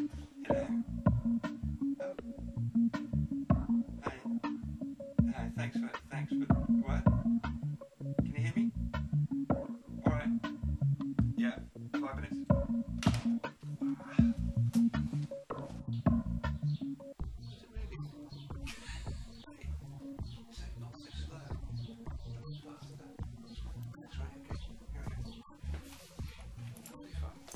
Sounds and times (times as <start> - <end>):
Music: 0.0 - 27.5
Speech: 5.2 - 7.2, 8.2 - 8.7, 10.0 - 10.4, 11.4 - 12.5, 17.5 - 18.2, 20.5 - 23.2, 24.0 - 25.4.